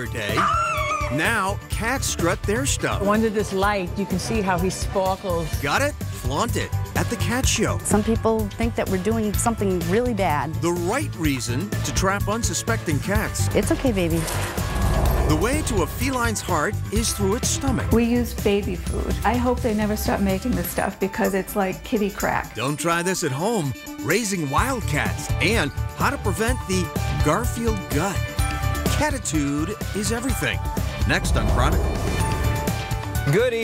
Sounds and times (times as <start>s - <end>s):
Music: 0.0s - 33.6s.